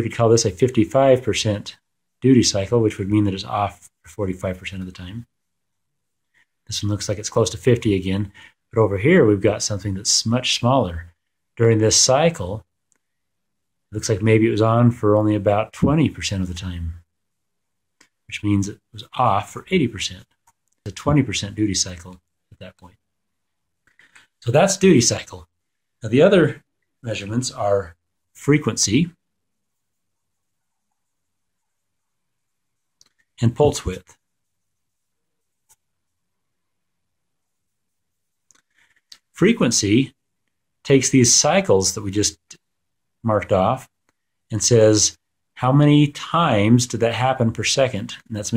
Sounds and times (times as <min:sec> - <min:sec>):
Speech: 0:00.0 - 0:05.3, 0:06.7 - 0:12.7, 0:13.9 - 0:17.1, 0:18.3 - 0:23.0, 0:24.4 - 0:29.2, 0:33.4 - 0:34.2, 0:39.2 - 0:40.2, 0:40.8 - 0:42.6, 0:43.2 - 0:48.5.